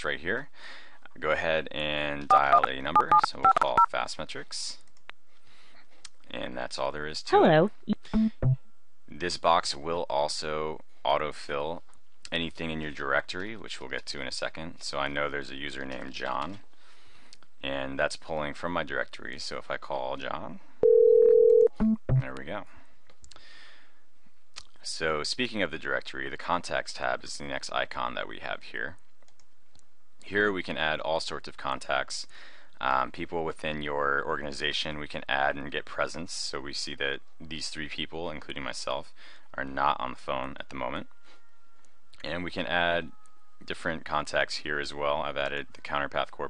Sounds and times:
Speech: 0.0 - 4.8, 6.3 - 8.4, 9.1 - 16.6, 17.6 - 20.6, 22.2 - 22.8, 24.6 - 29.0, 30.2 - 41.1, 42.2 - 46.4.

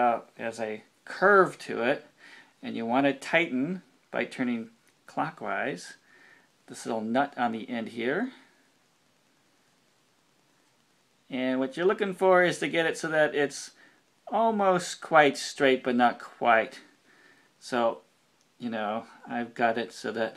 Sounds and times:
Speech: 0.0 - 6.0, 6.7 - 8.6, 11.3 - 17.0, 17.6 - 20.3.

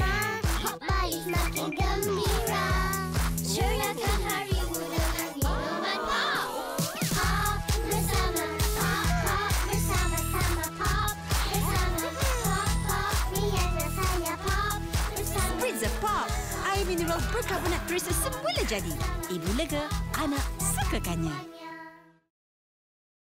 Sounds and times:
Music: 0.0 - 22.3
Speech: 15.4 - 21.5.

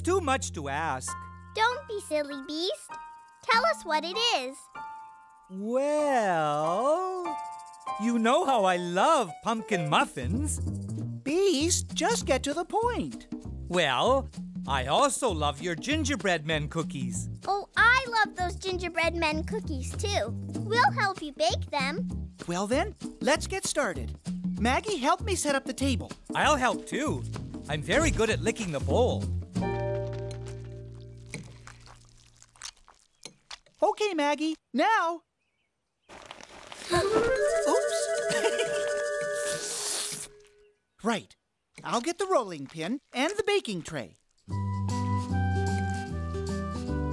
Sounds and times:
Music: 0.0 - 31.6, 37.0 - 40.2, 44.5 - 47.1
Speech: 5.6 - 7.3, 8.0 - 10.6, 11.3 - 29.3, 33.8 - 35.2, 41.0 - 44.2.

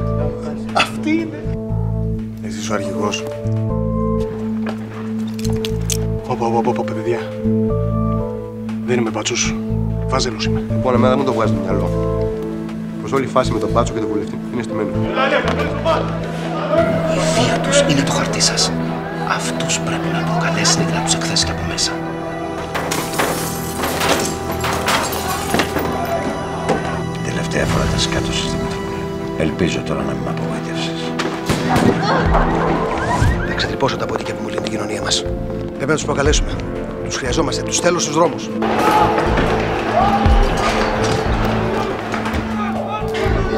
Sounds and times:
Music: 0.0 - 43.5.

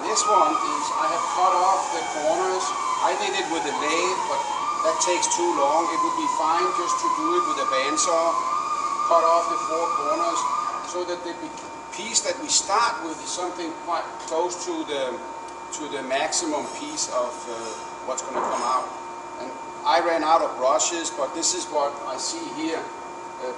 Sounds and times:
Speech: 0.0 - 8.4, 9.1 - 15.2, 15.8 - 23.5.

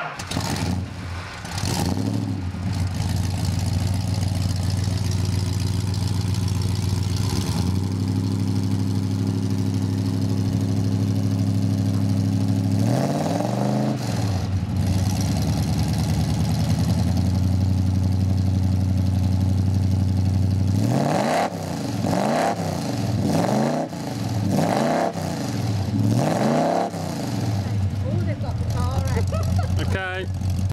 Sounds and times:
Car: 0.0 - 30.7
Speech: 29.8 - 30.3.

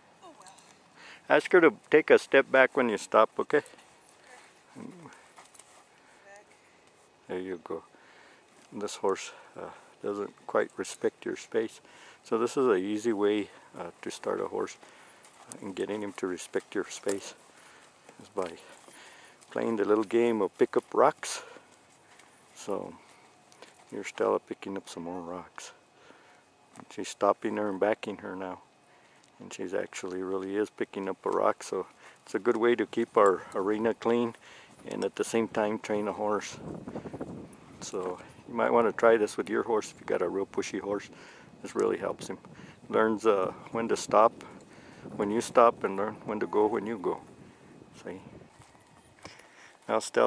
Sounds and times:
Clip-clop: 0.0 - 50.2
Speech: 1.3 - 3.7, 7.3 - 7.9, 8.7 - 14.8, 15.5 - 17.4, 18.2 - 18.7, 19.5 - 21.6, 22.6 - 23.0, 23.9 - 25.8, 26.9 - 28.6, 29.4 - 36.6, 37.8 - 44.5, 45.2 - 47.2, 48.0 - 48.3, 49.9 - 50.2.

